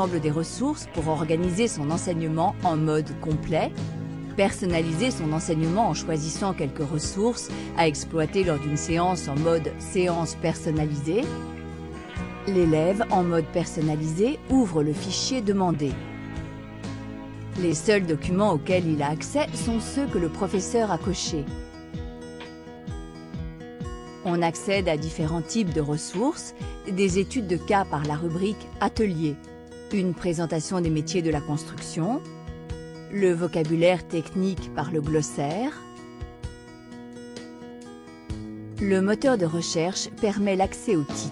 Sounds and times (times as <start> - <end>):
Speech: 0.0 - 3.7, 4.4 - 11.3, 12.5 - 16.0, 17.6 - 21.5, 24.3 - 32.2, 33.1 - 35.8, 38.8 - 41.3
Music: 0.0 - 41.3.